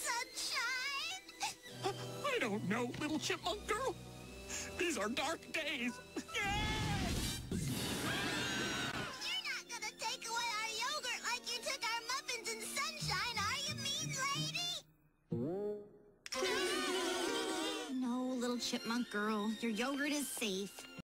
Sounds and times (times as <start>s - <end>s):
Music: 0.0s - 21.0s.